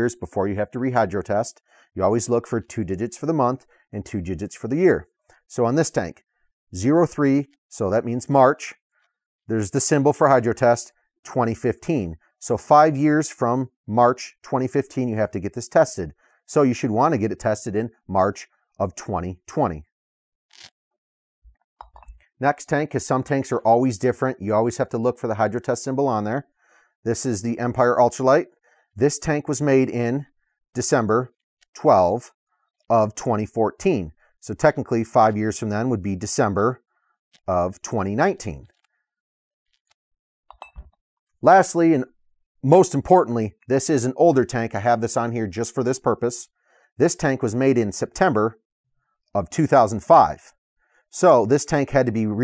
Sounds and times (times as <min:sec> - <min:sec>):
Speech: 0:00.0 - 0:06.2, 0:06.8 - 0:08.8, 0:09.5 - 0:19.9, 0:22.4 - 0:26.5, 0:27.1 - 0:32.3, 0:32.9 - 0:36.8, 0:37.5 - 0:38.7, 0:41.4 - 0:48.6, 0:49.4 - 0:50.5, 0:51.1 - 0:52.4.